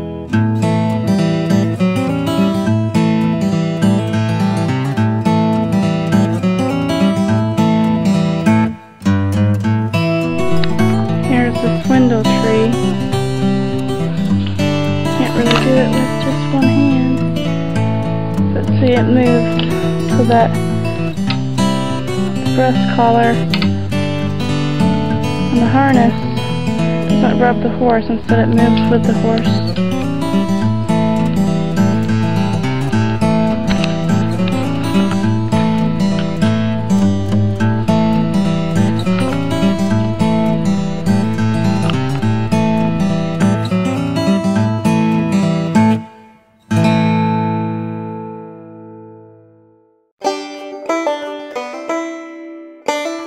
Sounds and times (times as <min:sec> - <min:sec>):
Music: 0:00.0 - 0:53.2
Speech: 0:11.3 - 0:12.8, 0:15.2 - 0:17.3, 0:18.5 - 0:19.5, 0:20.1 - 0:20.6, 0:22.5 - 0:23.4, 0:25.5 - 0:26.2, 0:27.2 - 0:29.8.